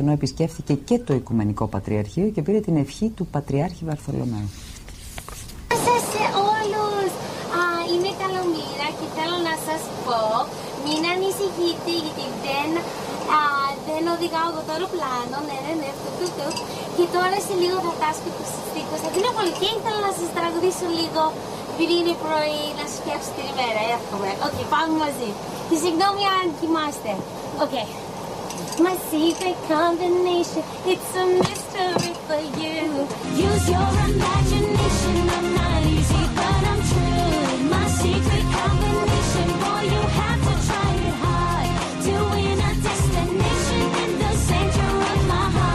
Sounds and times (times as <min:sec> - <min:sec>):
Speech: 0:00.0 - 0:04.6, 0:05.7 - 0:28.0.